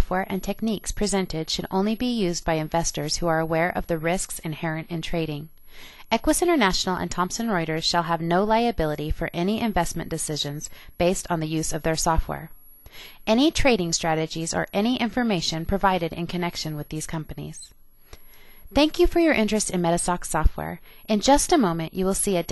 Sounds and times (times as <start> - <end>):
Speech: 0.0 - 5.5, 6.1 - 12.5, 13.3 - 17.7, 18.8 - 22.5.